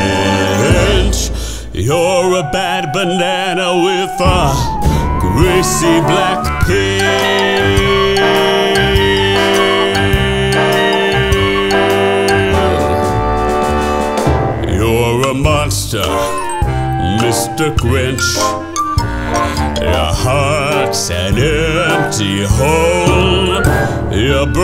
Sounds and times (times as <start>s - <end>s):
Singing: 0.0s - 13.3s, 14.6s - 18.6s, 19.4s - 24.6s.